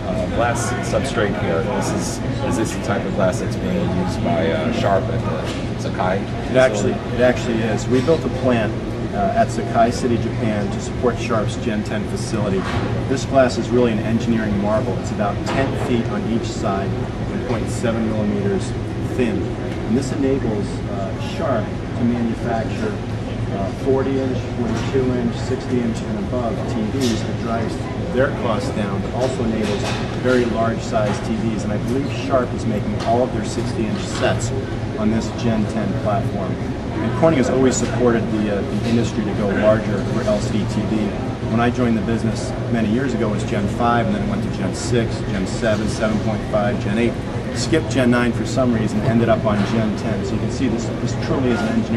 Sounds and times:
Speech: 0:00.0 - 0:51.9.

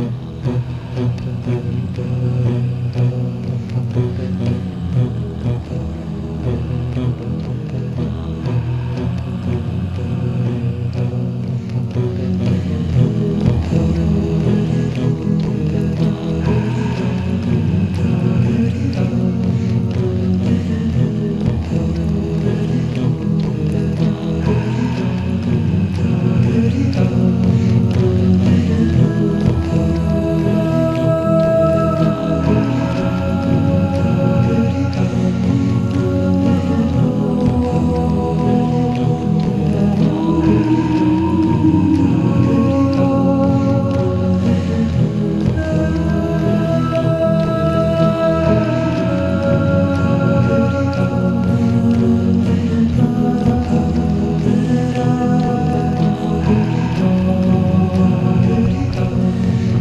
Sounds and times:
Music: 0:00.0 - 0:59.8.

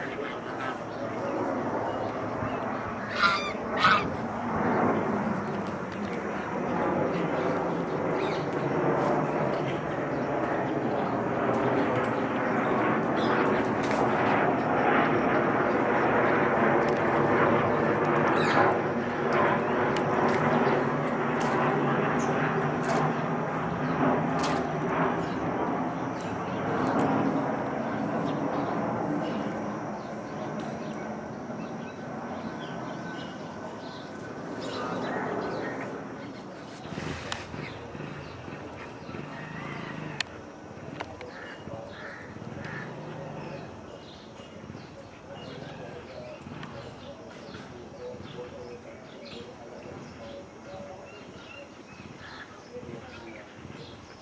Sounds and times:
Bird: 0:00.0 - 0:04.2, 0:18.2 - 0:18.8, 0:26.2 - 0:54.2
Outside, urban or manmade: 0:00.0 - 0:54.2
Goose: 0:03.1 - 0:04.1.

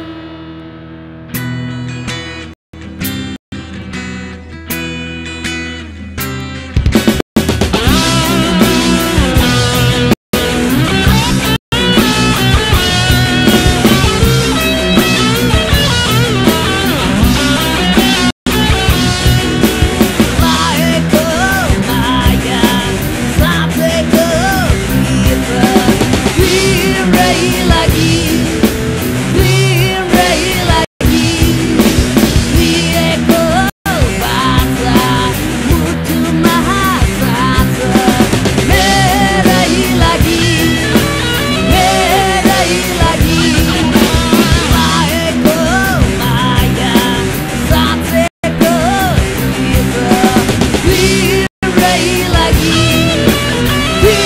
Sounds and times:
Music: 0:00.0 - 0:54.2
Male singing: 0:20.4 - 0:28.4, 0:29.4 - 0:31.5, 0:32.6 - 0:40.8, 0:41.6 - 0:53.1, 0:54.0 - 0:54.2.

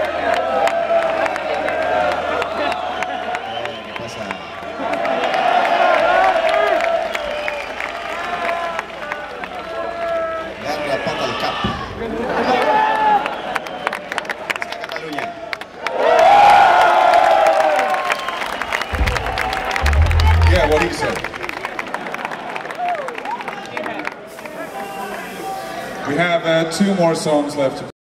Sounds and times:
Speech: 0:19.8 - 0:21.3, 0:23.5 - 0:27.9.

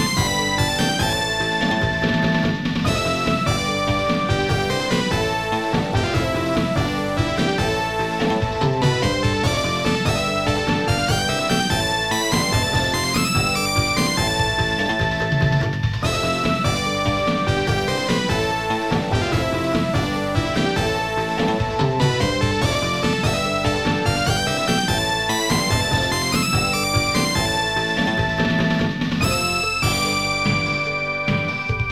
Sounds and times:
Video game music: 0:00.0 - 0:31.9.

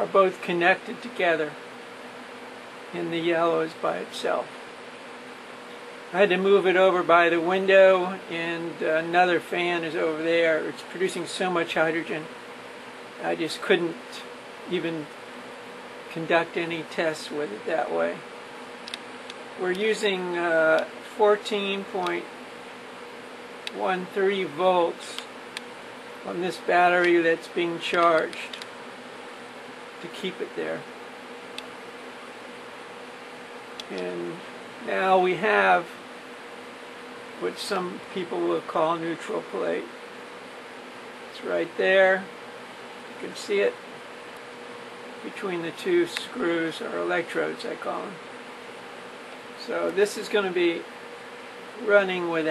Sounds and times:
Speech: 0:00.0 - 0:01.6, 0:02.9 - 0:04.5, 0:06.1 - 0:12.3, 0:13.2 - 0:15.1, 0:16.1 - 0:18.2, 0:19.6 - 0:22.3, 0:23.7 - 0:25.3, 0:26.3 - 0:28.6, 0:30.0 - 0:30.9, 0:33.9 - 0:36.0, 0:37.4 - 0:40.0, 0:41.4 - 0:42.3, 0:43.2 - 0:43.8, 0:45.2 - 0:48.2, 0:49.6 - 0:50.9, 0:51.8 - 0:52.5.

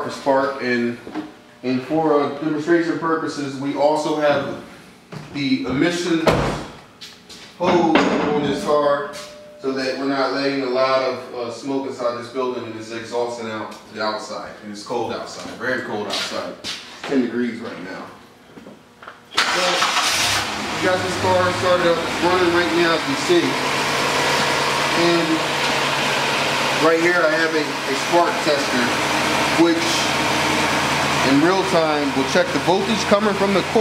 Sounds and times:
Speech: 0:00.0 - 0:04.7, 0:05.3 - 0:06.4, 0:07.6 - 0:18.2, 0:19.6 - 0:19.8, 0:20.8 - 0:23.6, 0:24.9 - 0:25.4, 0:26.8 - 0:29.0, 0:29.6 - 0:30.1, 0:31.2 - 0:33.8
Engine: 0:19.3 - 0:33.8
Car: 0:19.8 - 0:27.2.

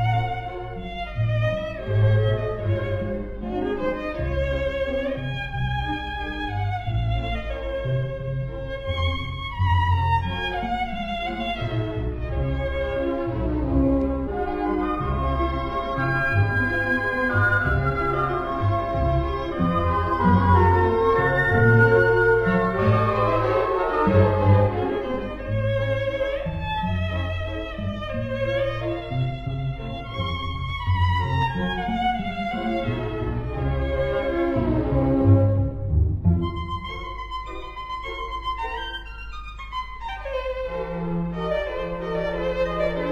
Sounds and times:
Orchestra: 0:00.0 - 0:43.1
Violin, fiddle: 0:00.0 - 0:43.1.

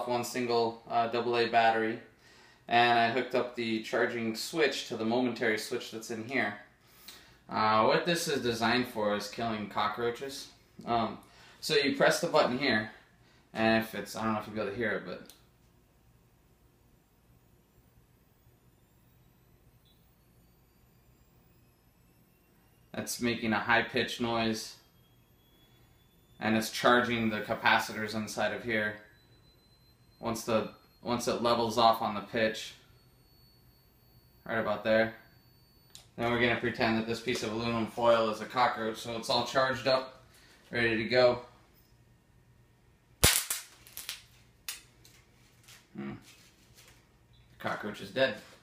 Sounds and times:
Speech: 0:00.0 - 0:02.1, 0:02.7 - 0:06.7, 0:07.5 - 0:13.0, 0:13.6 - 0:15.3, 0:23.0 - 0:24.8, 0:26.4 - 0:29.1, 0:30.2 - 0:32.8, 0:34.4 - 0:35.2, 0:36.2 - 0:41.5, 0:46.0 - 0:46.3, 0:47.6 - 0:48.6.

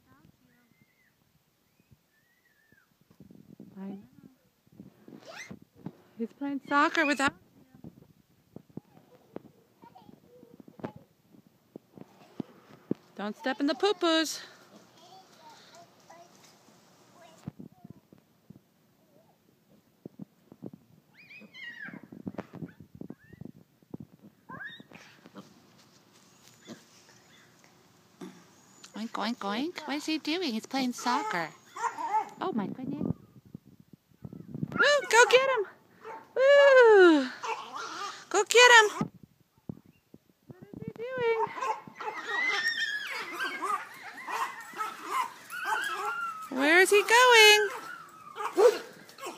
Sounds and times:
Domestic animals, pets: 0:21.1 - 0:23.5, 0:31.0 - 0:32.4, 0:37.4 - 0:38.2, 0:41.4 - 0:49.3.

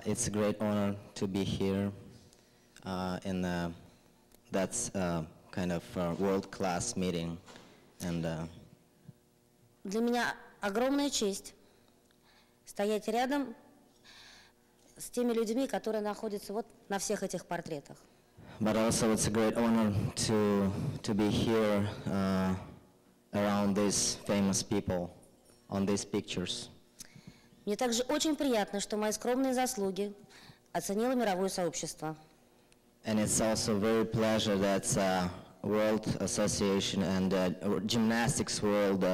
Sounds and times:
Male speech, man speaking: 0:00.0 - 0:02.1, 0:02.8 - 0:03.8, 0:04.5 - 0:08.6, 0:18.6 - 0:26.8, 0:33.0 - 0:39.1
Narration, monologue: 0:00.0 - 0:39.1
Female speech, woman speaking: 0:09.9 - 0:11.6, 0:12.7 - 0:13.6, 0:15.0 - 0:18.0, 0:27.7 - 0:30.2, 0:30.8 - 0:32.3.

